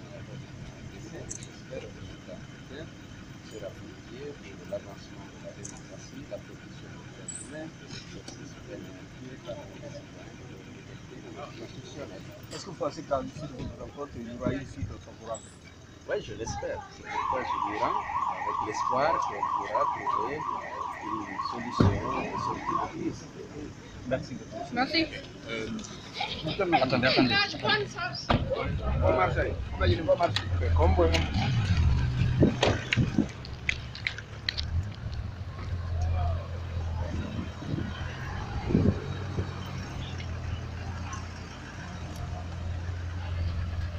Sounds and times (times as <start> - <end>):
Speech: 16.2 - 25.8.